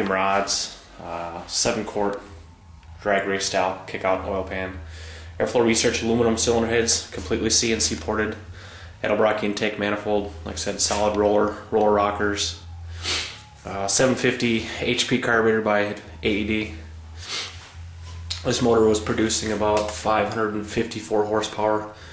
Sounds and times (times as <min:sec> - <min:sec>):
Speech: 0:00.0 - 0:02.3, 0:03.0 - 0:08.4, 0:09.0 - 0:12.6, 0:13.7 - 0:16.8, 0:18.3 - 0:22.0.